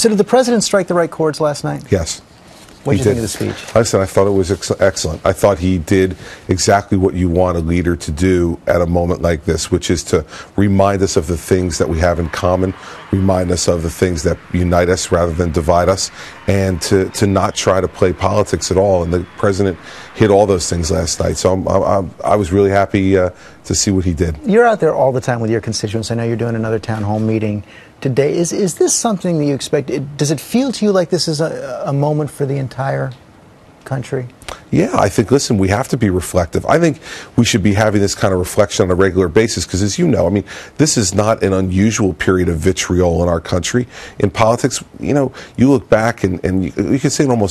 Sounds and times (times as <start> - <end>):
Male speech, man speaking: 0.0 - 2.2, 2.8 - 33.2, 33.8 - 47.5.